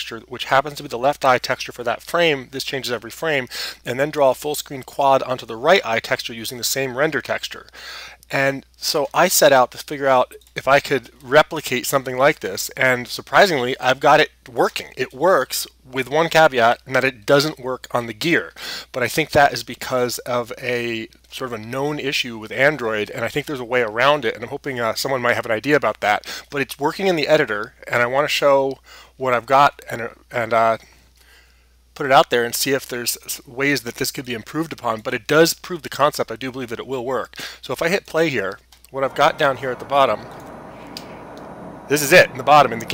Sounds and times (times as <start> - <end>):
Speech: 0.0 - 7.7, 8.3 - 30.8, 32.0 - 40.3, 41.9 - 42.9.